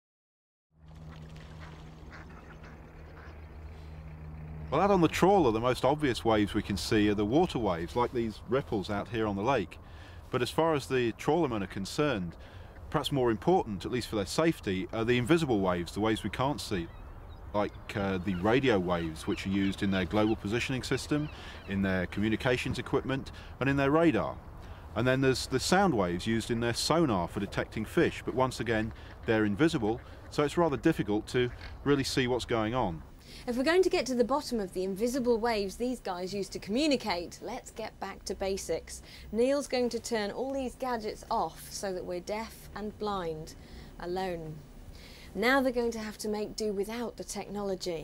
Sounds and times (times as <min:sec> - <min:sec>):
Speech: 0:04.7 - 0:12.3, 0:17.6 - 0:24.4, 0:25.0 - 0:44.6, 0:45.4 - 0:48.0.